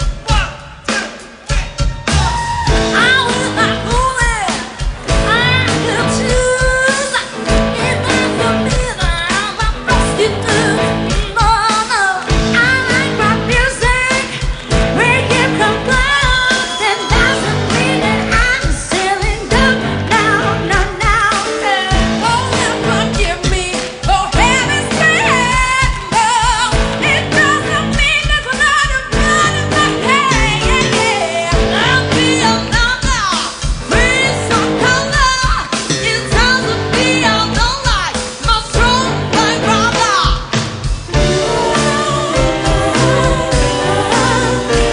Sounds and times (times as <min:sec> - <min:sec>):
Music: 0:00.0 - 0:44.9.